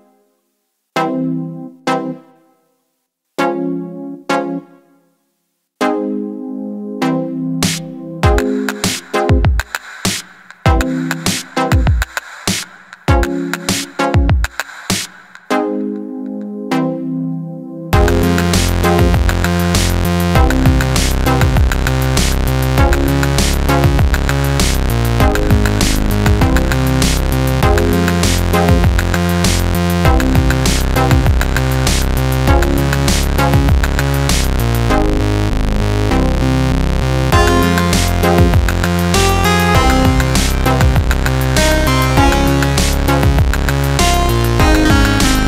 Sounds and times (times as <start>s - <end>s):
Music: 0.0s - 45.4s.